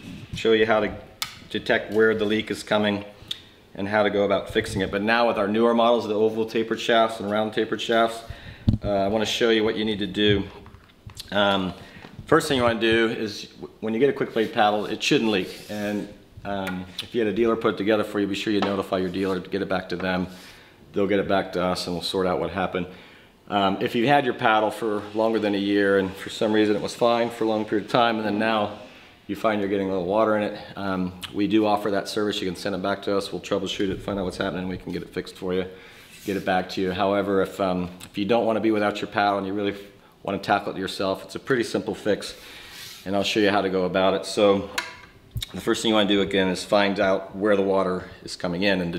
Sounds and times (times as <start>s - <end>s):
Speech: 0.4s - 3.1s, 3.8s - 10.6s, 11.2s - 20.3s, 20.9s - 42.4s, 43.0s - 44.8s, 45.4s - 48.9s.